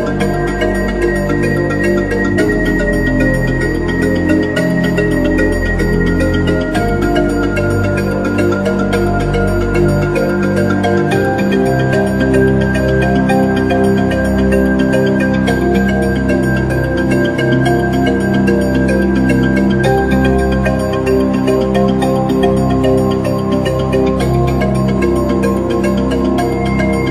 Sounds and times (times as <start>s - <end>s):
Music: 0.0s - 27.1s.